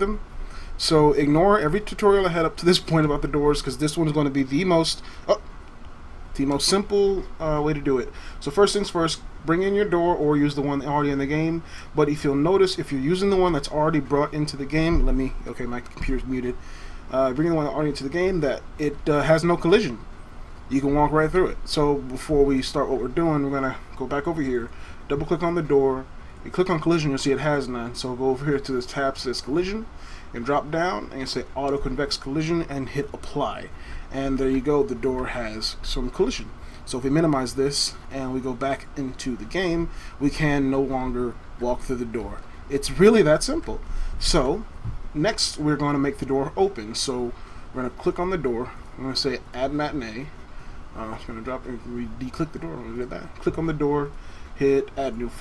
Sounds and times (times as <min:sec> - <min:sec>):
Speech: 0:00.0 - 0:00.2, 0:00.8 - 0:05.4, 0:06.4 - 0:20.0, 0:20.7 - 0:50.4, 0:51.0 - 0:55.4.